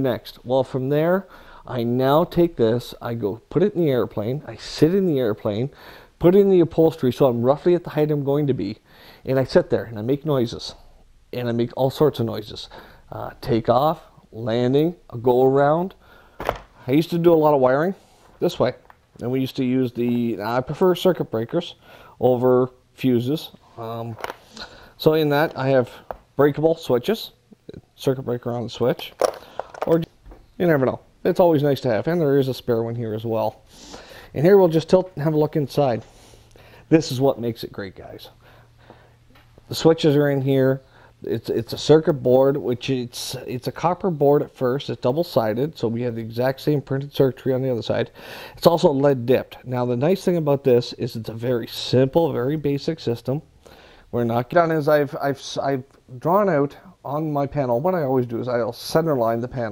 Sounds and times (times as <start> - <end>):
Speech: 0.0 - 16.0, 16.8 - 24.3, 25.0 - 29.2, 29.8 - 33.6, 34.3 - 36.1, 36.9 - 38.4, 39.7 - 53.5, 54.1 - 59.7.